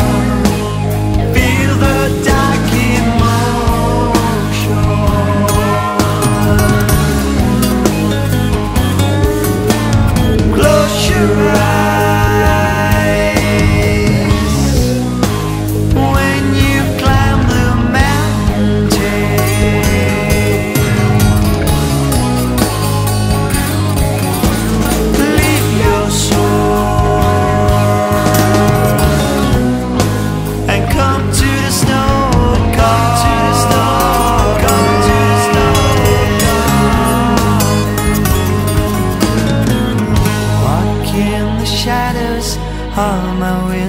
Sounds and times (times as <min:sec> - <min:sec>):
Independent music: 0:00.0 - 0:43.8.